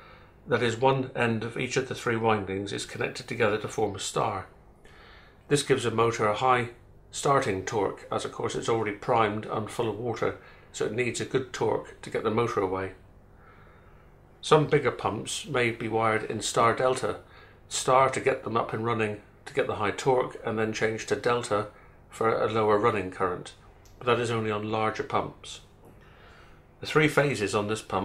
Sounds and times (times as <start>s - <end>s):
Speech: 0.5s - 4.6s, 5.5s - 13.0s, 14.4s - 25.7s, 26.8s - 28.0s.